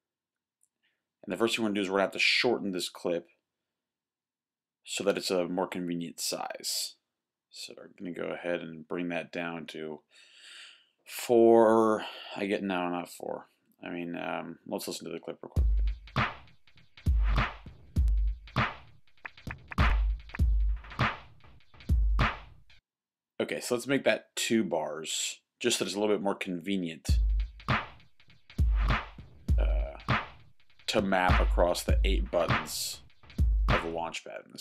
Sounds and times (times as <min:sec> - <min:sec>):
Speech: 0:01.2 - 0:03.4, 0:04.9 - 0:10.0, 0:11.1 - 0:15.6, 0:23.4 - 0:27.2, 0:29.6 - 0:30.0, 0:30.9 - 0:33.0, 0:33.7 - 0:34.6
Music: 0:15.6 - 0:22.8, 0:27.1 - 0:34.0.